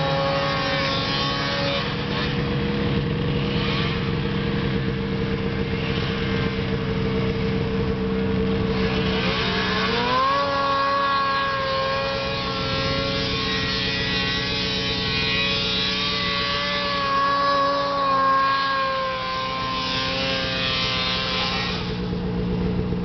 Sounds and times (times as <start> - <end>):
Vehicle: 0.0 - 23.0.